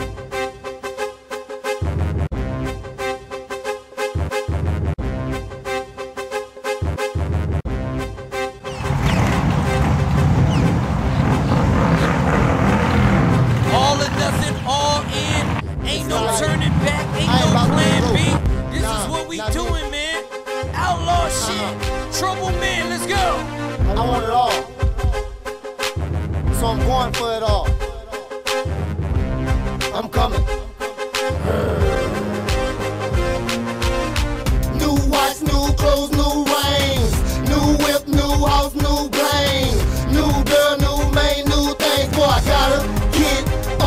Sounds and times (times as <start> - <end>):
Music: 0.0 - 11.8, 12.7 - 43.8
Speech: 13.7 - 20.2, 20.8 - 24.7, 26.6 - 27.8, 29.9 - 30.5.